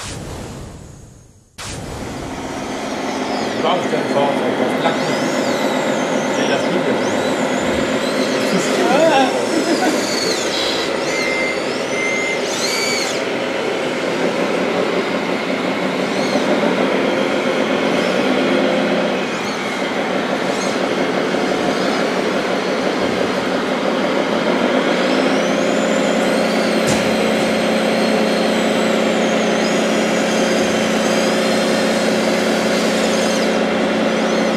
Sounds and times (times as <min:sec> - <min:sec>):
Truck: 0:02.2 - 0:34.5.